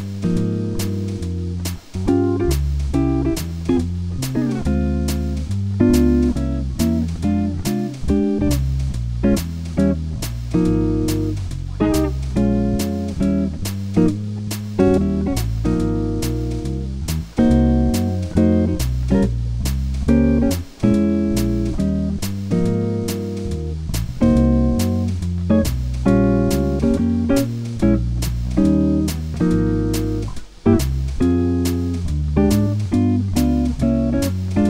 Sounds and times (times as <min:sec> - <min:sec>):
Music: 0:00.0 - 0:34.6.